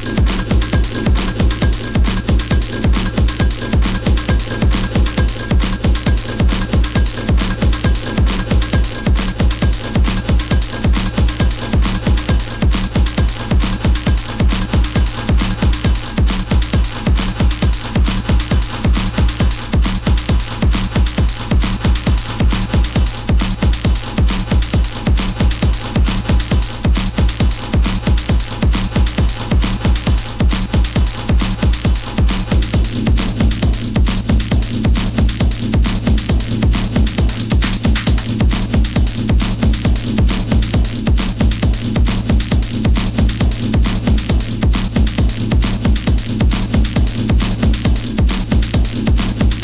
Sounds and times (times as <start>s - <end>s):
Electronica: 0.0s - 49.6s.